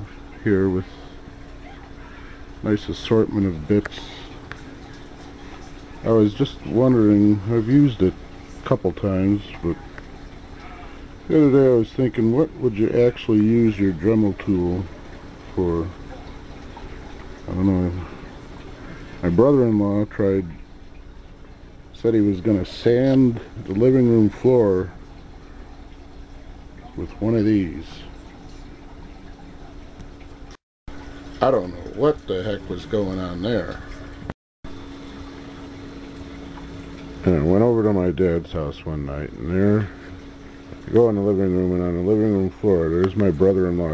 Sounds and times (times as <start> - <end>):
Speech: 0.0 - 0.9, 2.6 - 4.3, 6.0 - 9.9, 11.3 - 14.9, 15.6 - 16.0, 17.5 - 18.1, 19.2 - 20.6, 22.0 - 25.0, 26.9 - 28.2, 31.4 - 33.9, 37.2 - 40.0, 40.9 - 43.9.